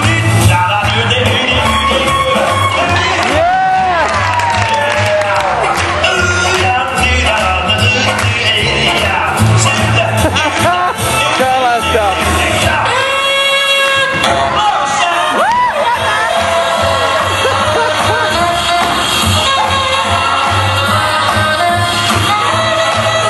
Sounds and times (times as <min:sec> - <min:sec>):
Music: 0:00.0 - 0:23.2.